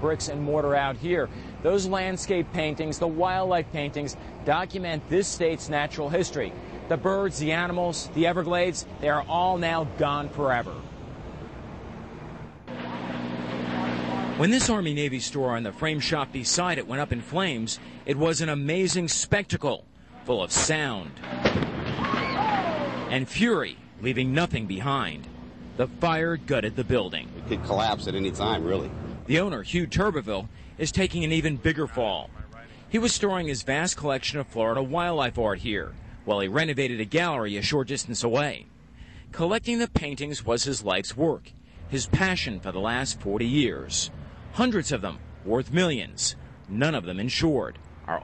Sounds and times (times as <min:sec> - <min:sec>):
Speech: 0:00.0 - 0:10.8, 0:13.8 - 0:21.2, 0:23.1 - 0:38.7, 0:39.4 - 0:48.2.